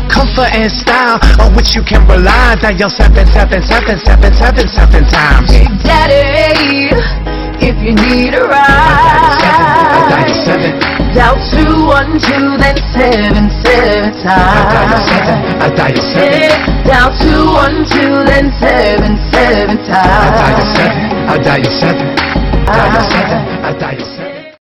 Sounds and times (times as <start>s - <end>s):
Music: 0.0s - 24.6s.